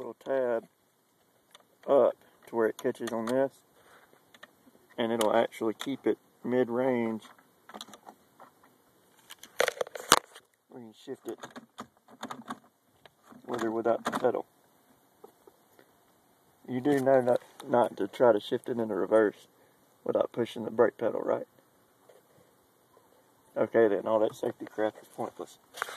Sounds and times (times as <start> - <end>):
Speech: 0.0 - 0.7, 1.8 - 3.6, 5.0 - 7.3, 10.7 - 11.4, 13.4 - 14.5, 16.7 - 21.5, 23.5 - 25.6.